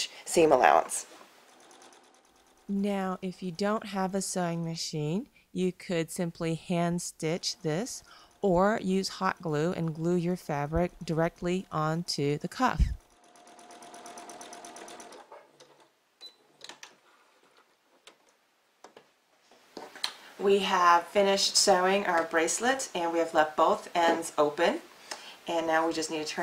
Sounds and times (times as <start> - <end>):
Speech: 0.0 - 1.1, 2.7 - 13.0, 20.4 - 24.9, 25.5 - 26.4
Sewing machine: 1.4 - 2.8, 12.9 - 15.8.